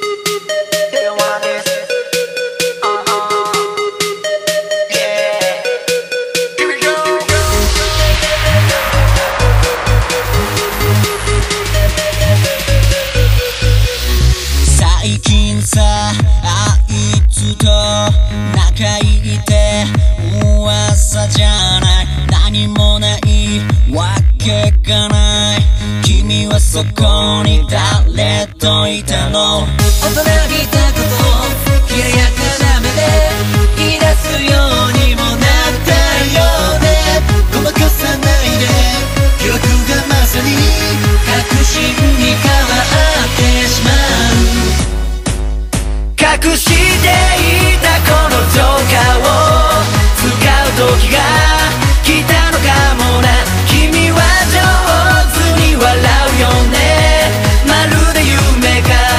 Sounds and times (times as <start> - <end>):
Music of Asia: 0.0 - 28.6, 29.7 - 59.1
Electronic dance music: 0.0 - 59.1.